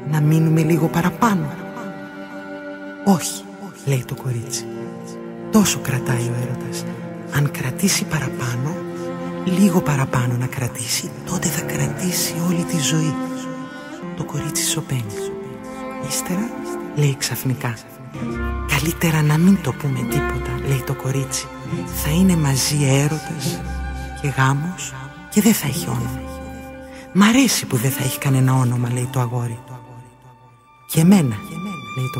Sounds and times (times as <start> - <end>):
Speech: 0.0 - 2.0, 3.1 - 8.8, 9.4 - 23.6, 24.2 - 26.4, 27.1 - 30.1, 30.9 - 32.1
Music: 0.0 - 32.1.